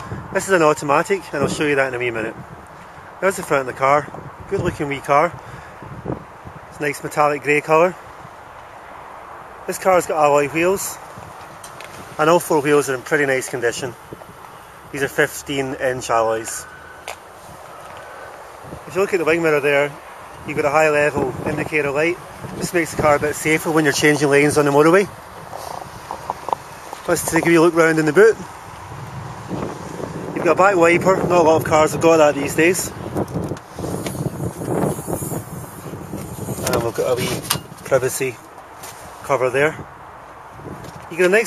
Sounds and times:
Speech: 0.3 - 2.4, 3.2 - 5.4, 6.7 - 8.0, 9.7 - 11.0, 12.2 - 14.0, 14.9 - 16.7, 18.9 - 25.1, 27.1 - 28.5, 30.4 - 33.0, 36.6 - 38.5, 39.2 - 39.8, 41.1 - 41.4.

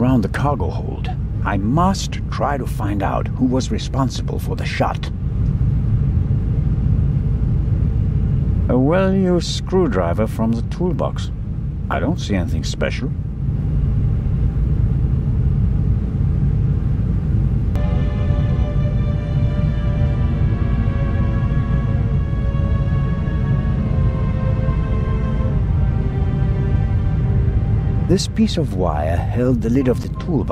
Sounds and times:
Speech: 0.0 - 5.1, 8.7 - 11.3, 11.9 - 13.2, 28.1 - 30.5
Silence: 13.2 - 28.2.

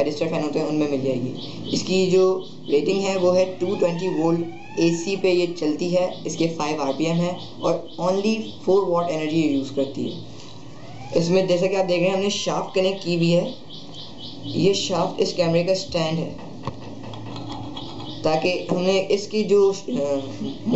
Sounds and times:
Speech: 0.0 - 10.2, 11.2 - 13.6, 14.5 - 16.4, 18.3 - 20.7.

